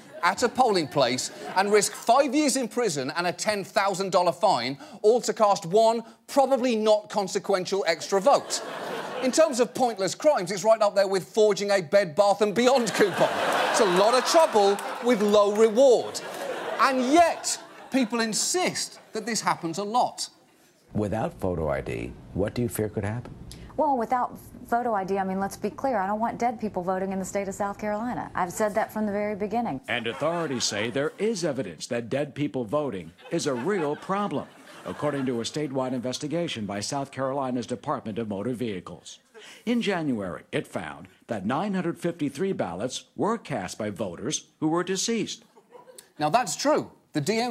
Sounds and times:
Female speech, woman speaking: 23.8s - 29.8s.

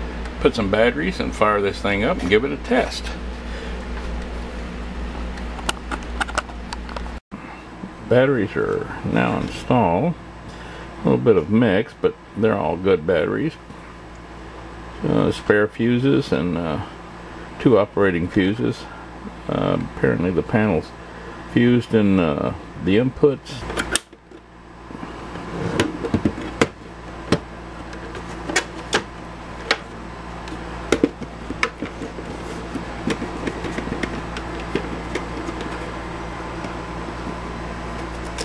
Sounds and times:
Speech: 0.4s - 3.2s, 8.0s - 10.2s, 11.0s - 13.7s, 15.0s - 17.0s, 17.6s - 23.7s.

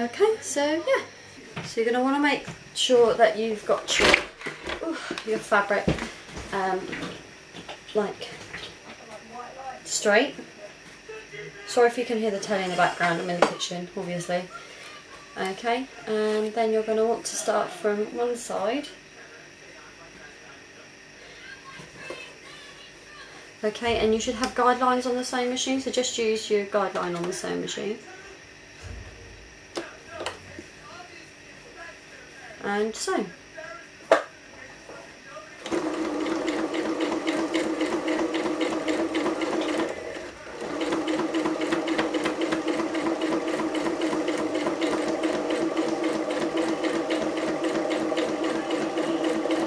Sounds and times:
Sewing machine: 35.6s - 49.6s.

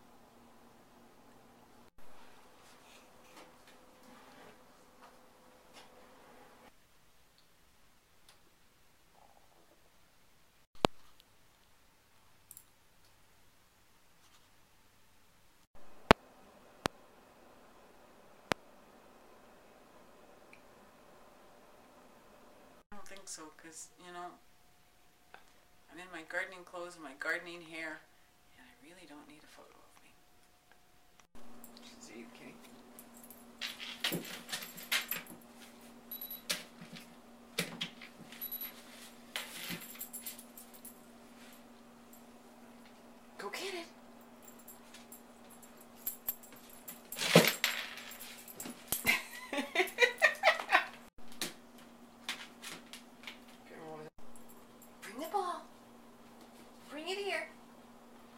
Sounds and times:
Silence: 0.0s - 23.0s.

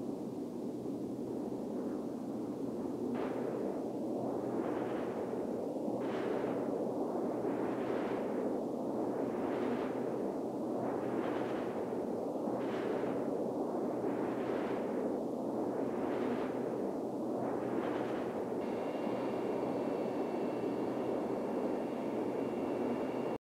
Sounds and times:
Wind noise (microphone): 0.0s - 23.4s.

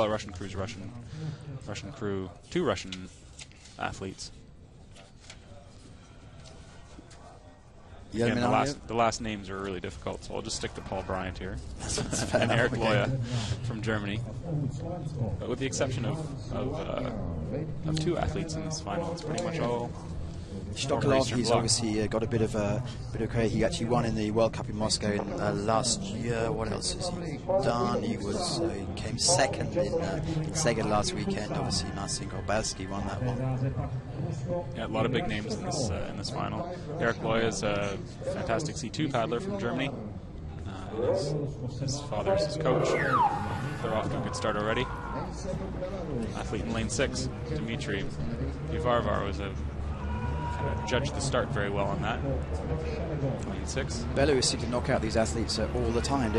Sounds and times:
Speech: 0.0s - 3.2s, 3.8s - 4.4s, 8.0s - 20.0s, 20.7s - 49.6s, 50.6s - 56.3s.

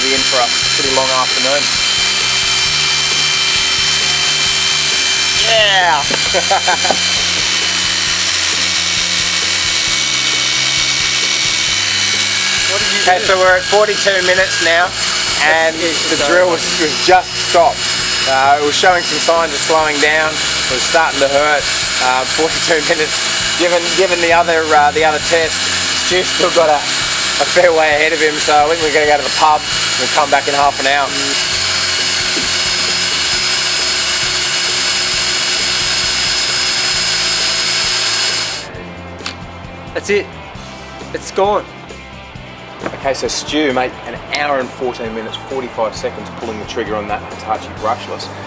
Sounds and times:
Power tool: 0.0s - 39.5s.

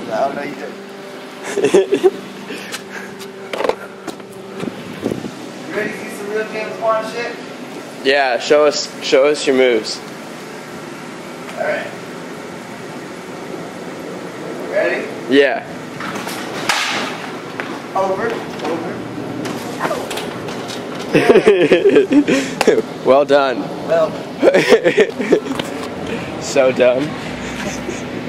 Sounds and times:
Outside, urban or manmade: 0.0s - 28.2s
Vehicle: 0.0s - 28.2s.

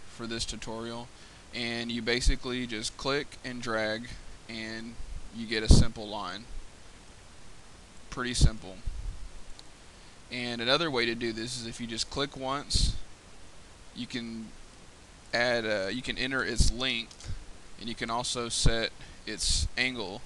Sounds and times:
Speech: 0.2s - 6.5s, 8.1s - 8.9s, 10.3s - 13.0s, 14.0s - 14.5s, 15.3s - 17.1s, 17.8s - 20.2s.

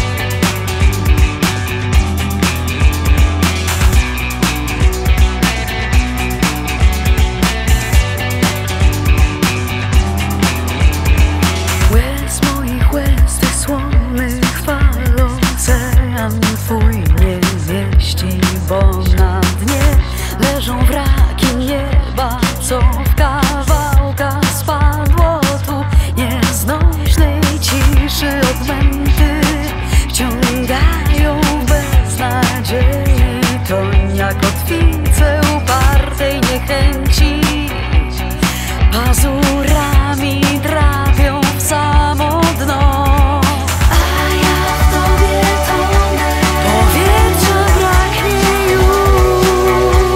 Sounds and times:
Music: 0.0s - 50.1s.

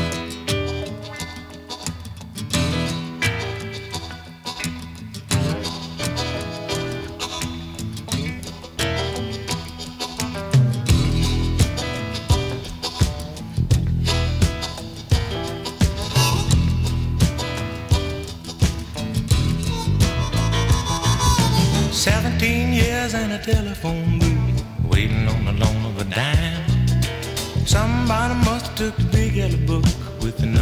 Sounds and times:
Music: 0.0s - 30.6s.

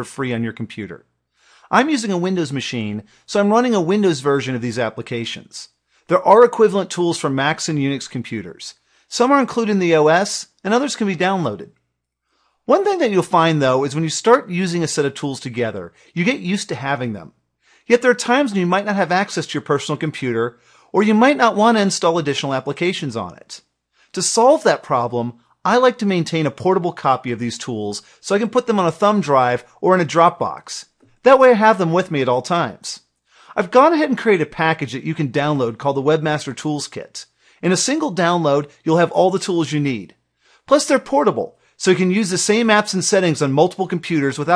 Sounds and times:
Speech: 0.0s - 1.1s, 1.7s - 11.8s, 12.7s - 44.5s.

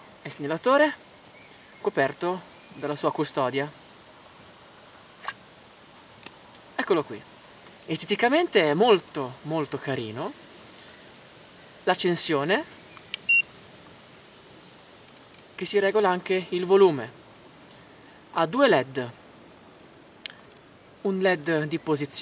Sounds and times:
Speech: 0.2s - 1.0s, 1.8s - 3.8s, 6.8s - 7.3s, 7.9s - 10.4s, 11.9s - 12.7s, 15.6s - 17.2s, 18.3s - 19.2s, 21.0s - 22.2s.

